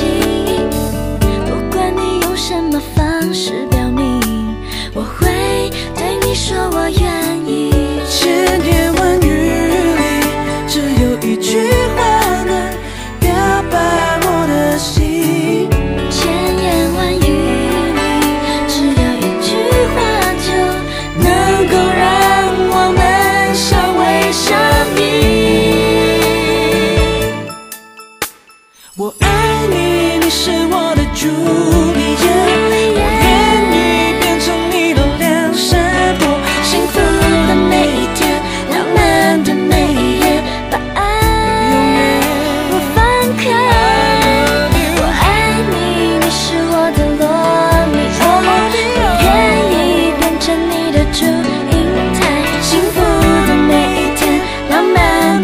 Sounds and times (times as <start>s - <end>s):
Music: 0.0s - 55.4s.